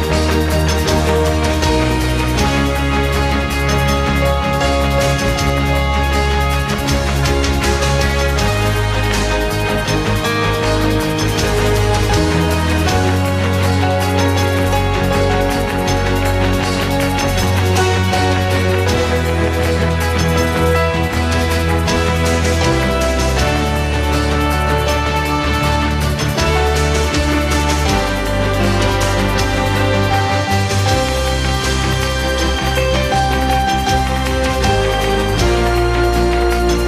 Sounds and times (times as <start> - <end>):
Soundtrack music: 0.0 - 36.8.